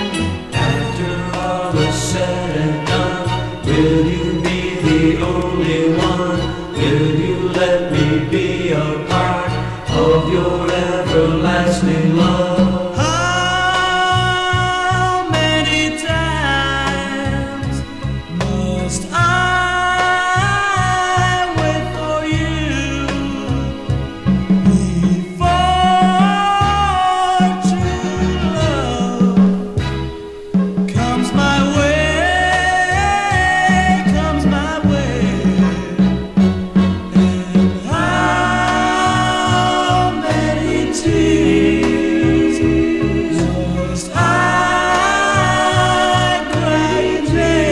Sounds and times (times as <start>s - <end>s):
Music: 0.0s - 47.7s.